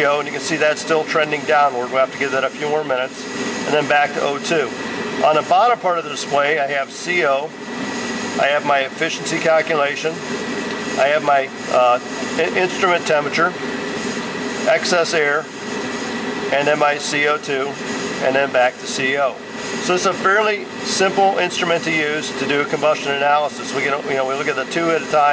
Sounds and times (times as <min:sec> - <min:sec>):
Speech: 0:00.0 - 0:07.6, 0:08.4 - 0:10.2, 0:11.0 - 0:13.6, 0:14.6 - 0:15.5, 0:16.5 - 0:25.3.